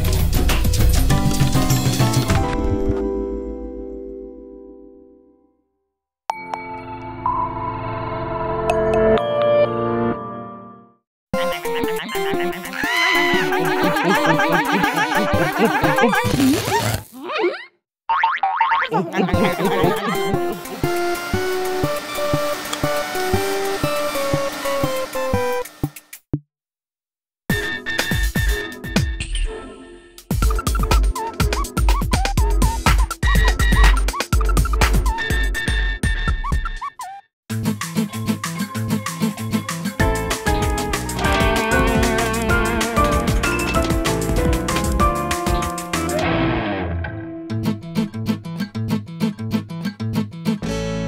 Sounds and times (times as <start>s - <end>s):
Funny music: 0.0s - 3.0s, 9.2s - 17.5s, 18.6s - 25.7s, 27.5s - 50.3s.